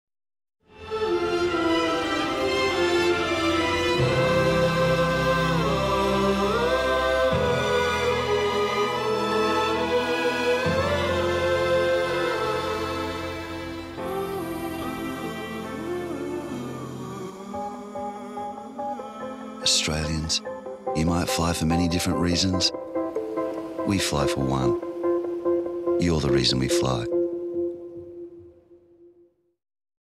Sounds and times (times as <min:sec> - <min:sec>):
Music: 0:00.6 - 0:29.6
Speech: 0:19.6 - 0:20.4, 0:21.0 - 0:22.8, 0:23.8 - 0:24.8, 0:26.0 - 0:27.1.